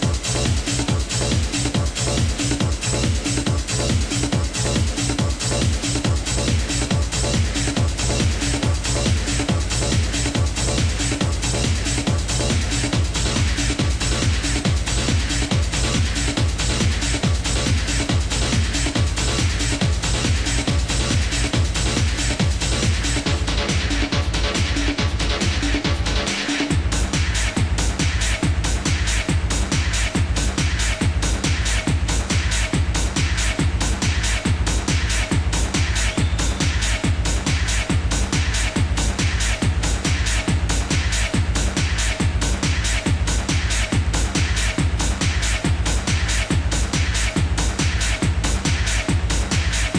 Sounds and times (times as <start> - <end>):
Techno: 0.0 - 49.9.